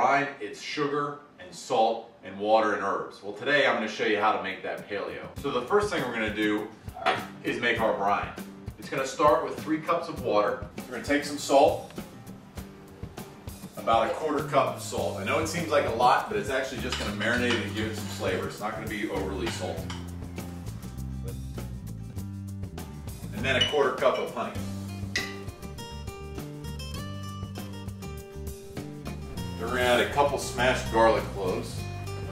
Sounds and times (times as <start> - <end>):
Speech: 0.0 - 11.9, 13.8 - 19.9, 23.3 - 24.6, 29.6 - 31.8
Music: 4.3 - 32.3.